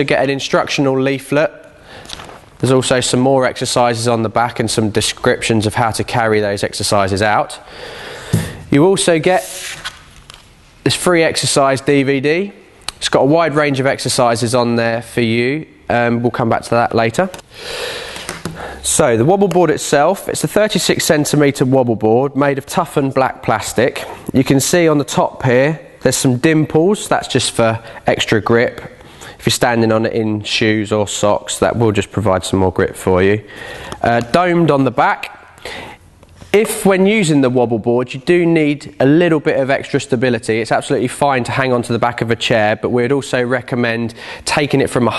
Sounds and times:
Speech: 0.0s - 1.6s, 2.6s - 7.6s, 8.7s - 9.7s, 10.8s - 17.4s, 18.8s - 35.4s, 36.5s - 45.1s.

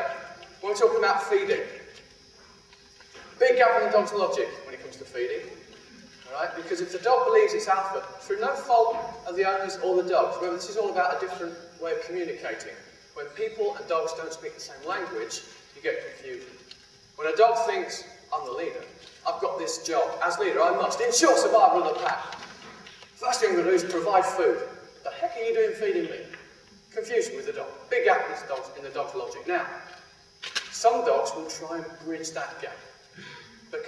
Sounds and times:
Speech: 0.0s - 1.9s, 3.4s - 5.6s, 6.3s - 16.6s, 17.2s - 22.4s, 23.2s - 29.9s, 30.8s - 33.0s.

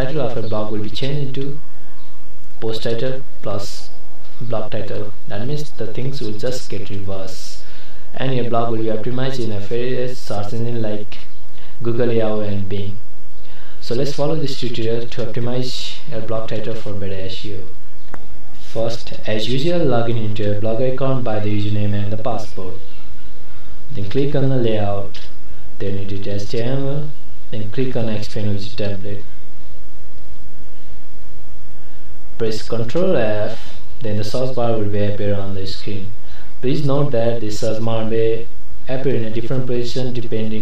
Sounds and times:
Speech: 0.0s - 1.6s, 2.6s - 13.0s, 13.8s - 17.8s, 18.6s - 22.8s, 23.9s - 29.3s, 32.4s - 40.6s.

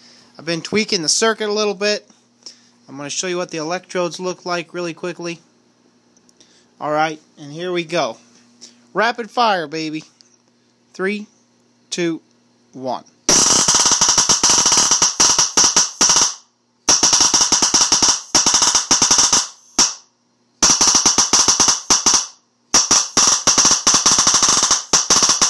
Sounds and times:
Speech: 0.4s - 2.1s, 2.9s - 5.5s, 6.8s - 8.3s, 8.9s - 10.1s, 10.9s - 11.3s, 11.9s - 13.2s.

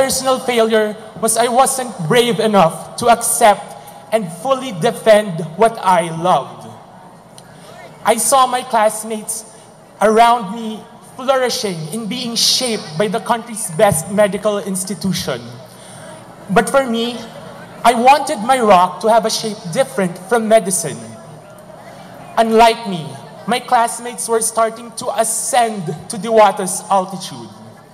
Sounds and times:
Male speech, man speaking: 0.0s - 6.8s, 8.0s - 15.6s, 16.5s - 21.3s, 22.4s - 27.8s
Narration, monologue: 0.0s - 21.8s, 22.4s - 27.8s.

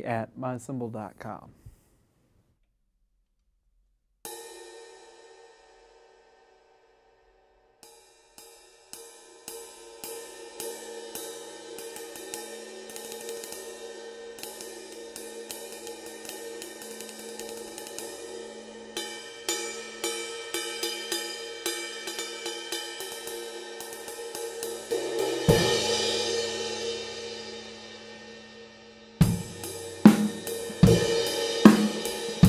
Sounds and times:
Cymbal: 4.3s - 32.4s.

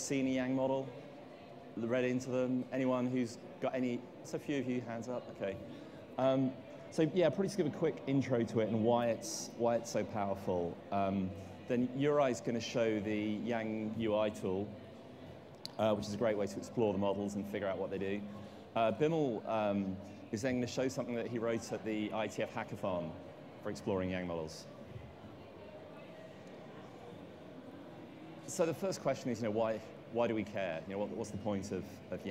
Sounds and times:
Speech: 0.0s - 1.1s, 1.7s - 15.0s, 15.7s - 27.3s, 28.4s - 32.3s.

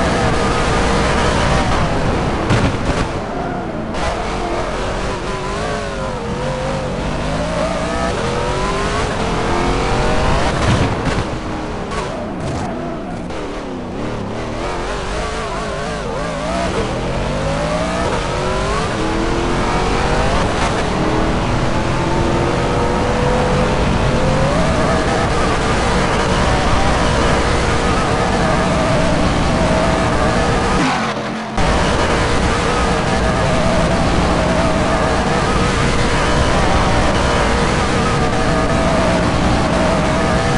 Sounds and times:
Car: 0.0s - 40.5s.

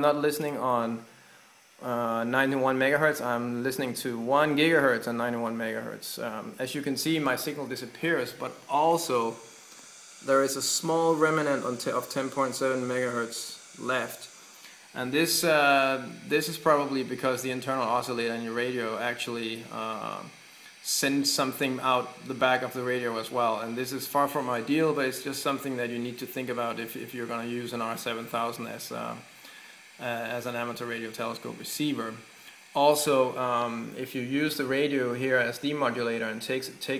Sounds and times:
Speech: 0.0s - 1.1s, 1.8s - 9.4s, 10.2s - 14.3s, 15.0s - 29.3s, 30.0s - 36.9s.

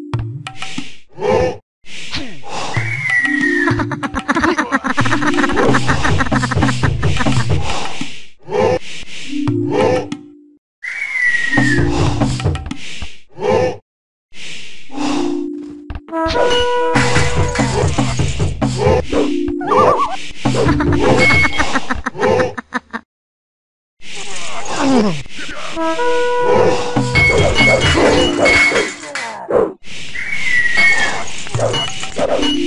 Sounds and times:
Music: 3.2s - 3.9s, 5.2s - 7.6s, 11.6s - 12.6s, 15.1s - 21.5s, 26.8s - 29.0s.

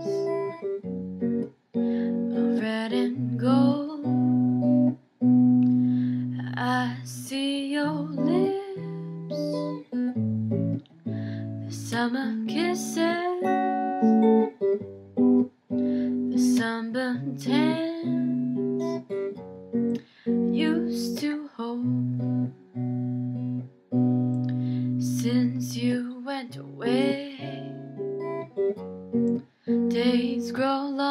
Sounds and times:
Acoustic guitar: 0.0s - 31.1s.

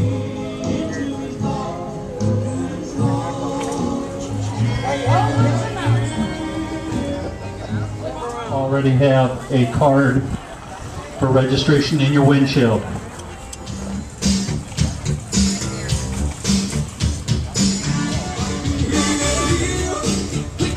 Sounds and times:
Music: 0.0s - 9.1s, 13.2s - 20.7s
Speech: 7.5s - 13.2s.

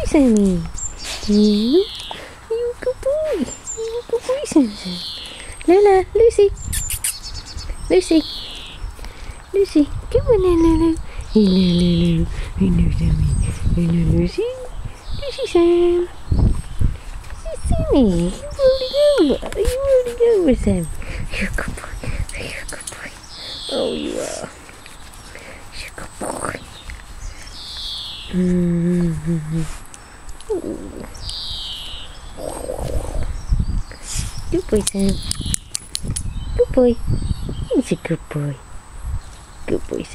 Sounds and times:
Speech: 0.0s - 0.7s, 1.3s - 1.9s, 2.5s - 5.0s, 5.6s - 6.6s, 7.9s - 8.3s, 9.6s - 16.1s, 17.4s - 23.1s, 23.7s - 24.6s, 28.3s - 29.8s, 34.5s - 35.3s, 36.6s - 37.0s, 37.7s - 38.6s, 39.7s - 40.1s.

